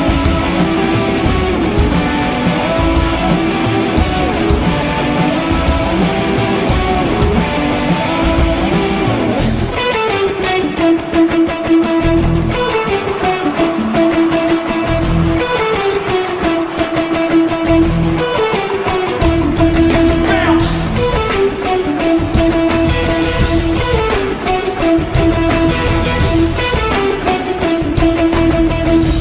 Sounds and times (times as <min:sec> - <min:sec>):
Guitar: 0:00.0 - 0:29.2.